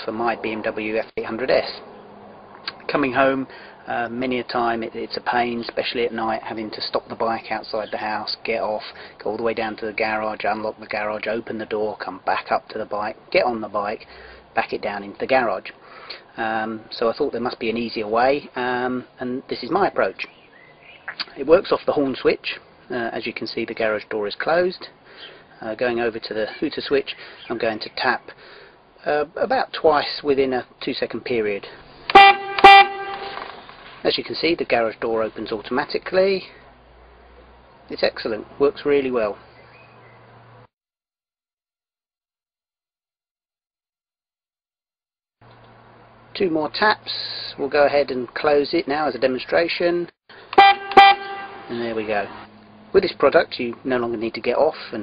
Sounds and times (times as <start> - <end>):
Speech: 0.0 - 1.8, 2.7 - 20.3, 21.2 - 25.0, 25.6 - 28.4, 29.0 - 31.8, 34.0 - 36.6, 37.9 - 39.4, 46.4 - 50.2, 51.7 - 52.4, 53.0 - 55.0.